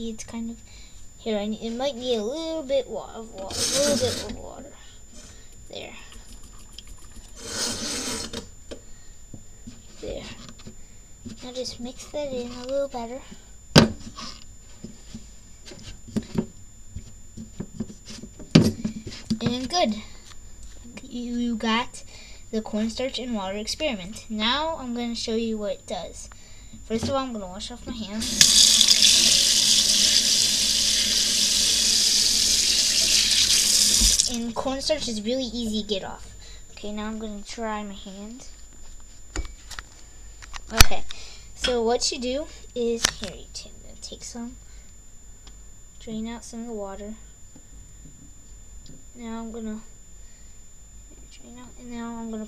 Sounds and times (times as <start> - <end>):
Speech: 0.0 - 0.6, 1.2 - 4.9, 5.7 - 6.1, 10.0 - 10.4, 11.4 - 13.3, 19.3 - 20.1, 20.8 - 26.3, 26.9 - 28.3, 34.3 - 38.6, 40.7 - 44.6, 46.0 - 47.2, 49.2 - 49.9, 51.3 - 52.4.